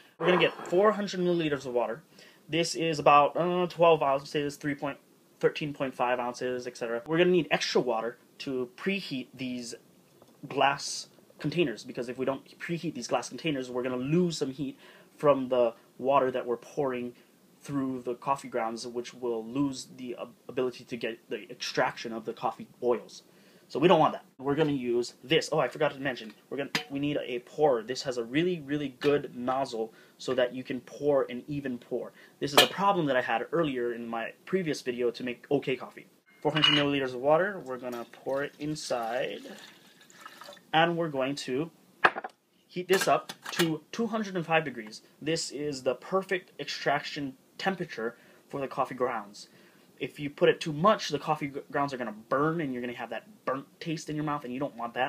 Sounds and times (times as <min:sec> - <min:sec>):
Inside, small room: 0:00.0 - 0:55.0
Speech: 0:00.2 - 0:09.8, 0:10.4 - 0:39.6, 0:40.7 - 0:41.8, 0:42.7 - 0:55.0
Pour: 0:37.6 - 0:40.8.